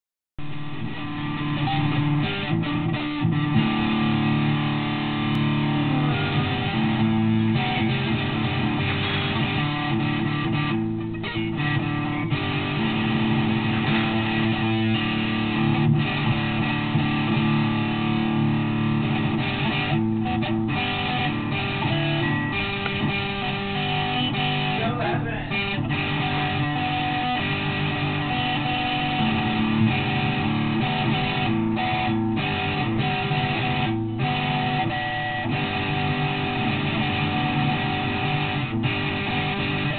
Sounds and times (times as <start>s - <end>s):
Bass guitar: 0.4s - 39.9s
Electric guitar: 0.4s - 39.9s
Strum: 0.4s - 39.9s.